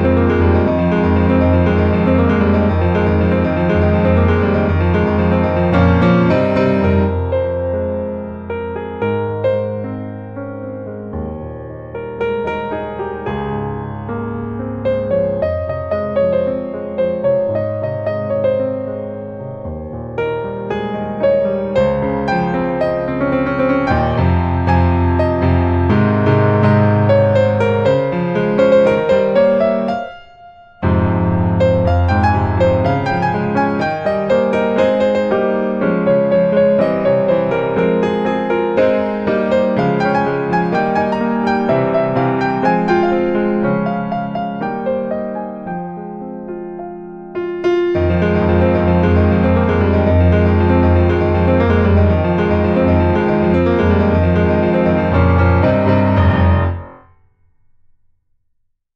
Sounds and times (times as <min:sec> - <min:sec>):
Music: 0:00.0 - 0:58.9.